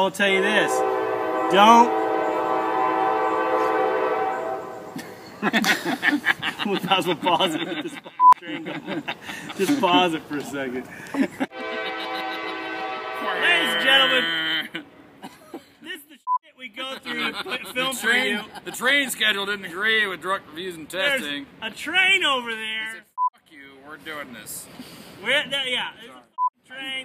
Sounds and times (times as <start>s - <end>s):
Train horn: 0.2s - 5.0s, 11.5s - 14.2s
Speech: 13.2s - 14.7s, 15.8s - 27.0s.